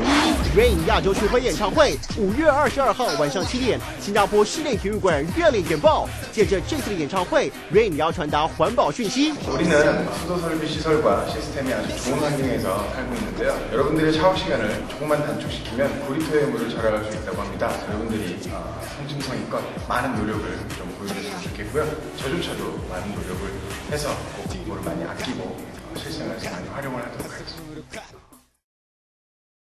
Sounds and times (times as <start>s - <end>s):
Music: 0.0s - 28.6s
Speech: 0.4s - 28.2s.